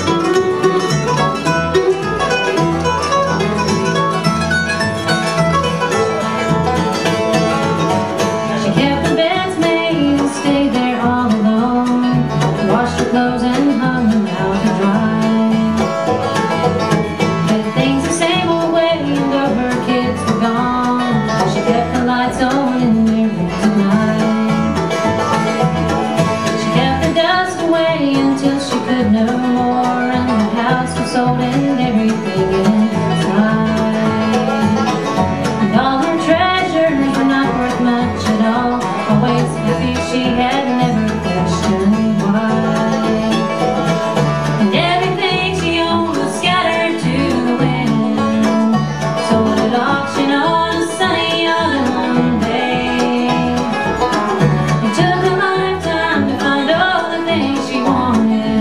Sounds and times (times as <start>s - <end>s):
Music: 0.0s - 58.6s.